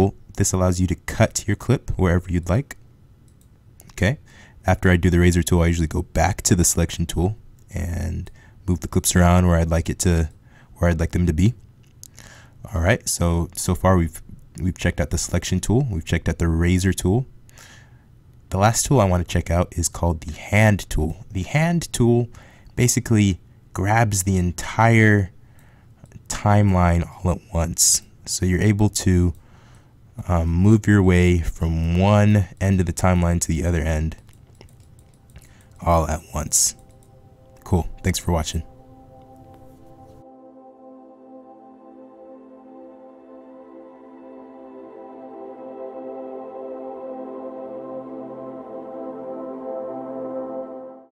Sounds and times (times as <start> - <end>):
Music: 34.6 - 51.1.